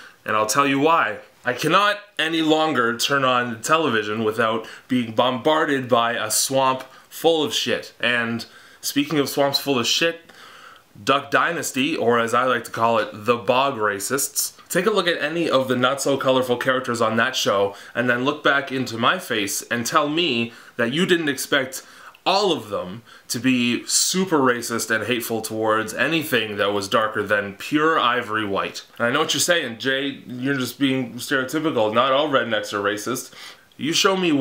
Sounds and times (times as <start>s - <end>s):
Speech: 0.0s - 10.3s, 11.0s - 34.4s.